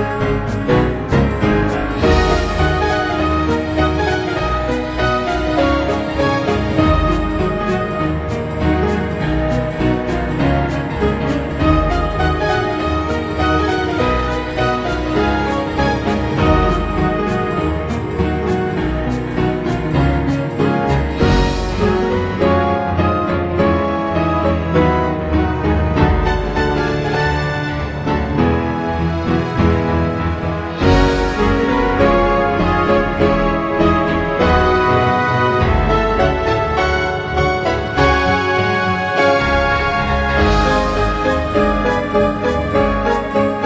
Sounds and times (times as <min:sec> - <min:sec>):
Music: 0:00.0 - 0:43.6.